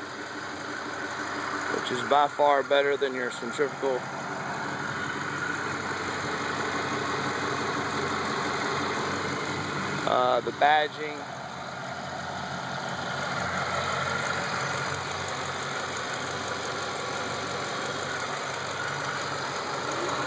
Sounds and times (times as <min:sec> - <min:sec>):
Idling: 0:00.0 - 0:20.2
Vehicle: 0:00.0 - 0:20.2
Speech: 0:01.7 - 0:04.0, 0:10.1 - 0:11.2.